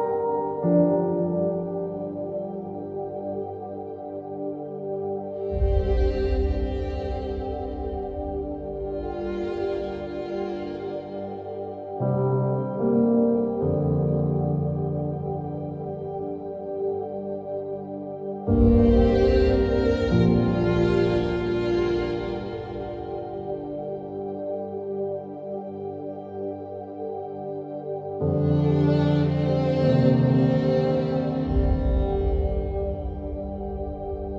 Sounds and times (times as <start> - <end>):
Music: 0.0 - 34.3.